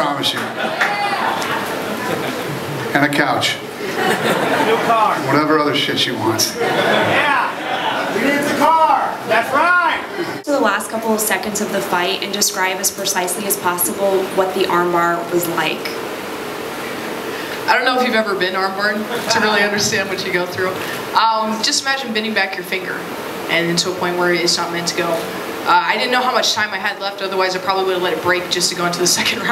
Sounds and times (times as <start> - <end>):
Speech: 4.8 - 16.0, 17.7 - 29.5.